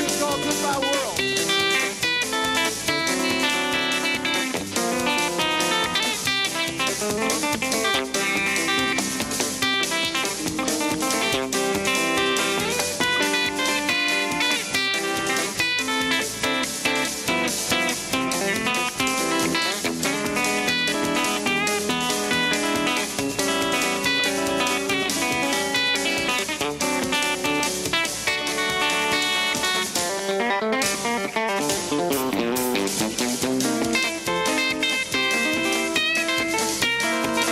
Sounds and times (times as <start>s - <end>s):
Acoustic guitar: 0.0s - 37.5s
Electric guitar: 0.0s - 37.5s
Strum: 0.0s - 37.5s.